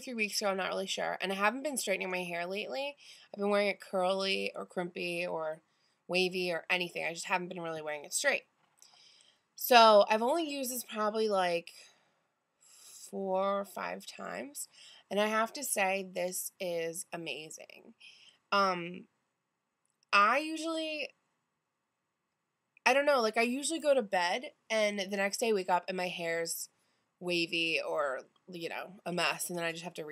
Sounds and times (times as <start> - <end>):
Speech: 0.0 - 8.4, 9.6 - 11.8, 13.0 - 17.9, 18.6 - 19.0, 20.2 - 21.1, 22.9 - 30.1.